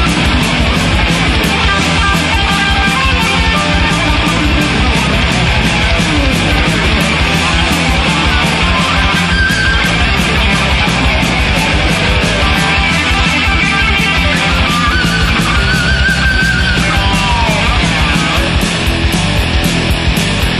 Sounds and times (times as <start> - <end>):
Heavy metal: 0.0 - 20.5.